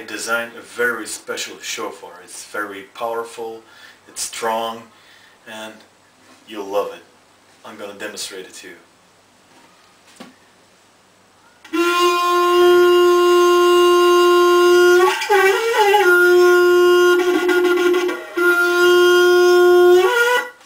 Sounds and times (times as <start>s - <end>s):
Wind instrument, woodwind instrument: 11.6s - 20.6s
Shofar: 11.7s - 20.6s.